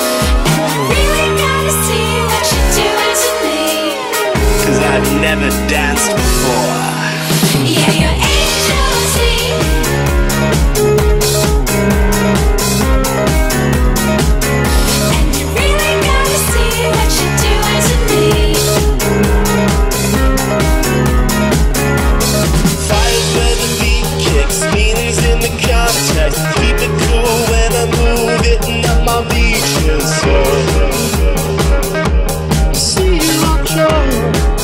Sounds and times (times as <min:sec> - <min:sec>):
Music: 0:00.0 - 0:34.6.